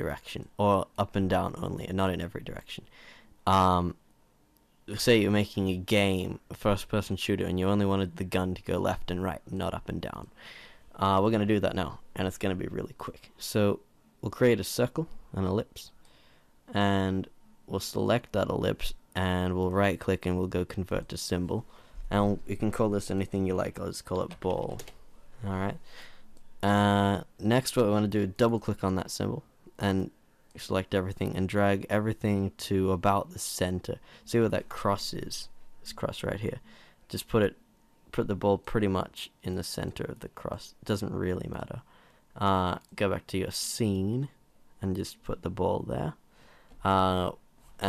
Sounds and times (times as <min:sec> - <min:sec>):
Speech: 0:00.0 - 0:04.0, 0:04.9 - 0:10.4, 0:11.0 - 0:16.0, 0:16.7 - 0:24.8, 0:25.4 - 0:25.9, 0:26.6 - 0:46.2, 0:46.8 - 0:47.8.